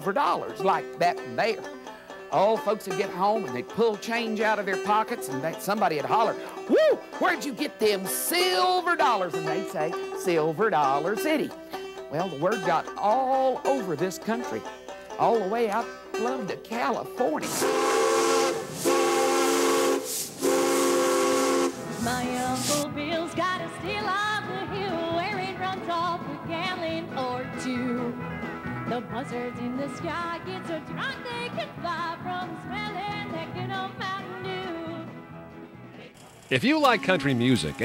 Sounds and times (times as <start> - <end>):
Music: 0.0 - 17.9, 21.6 - 37.8.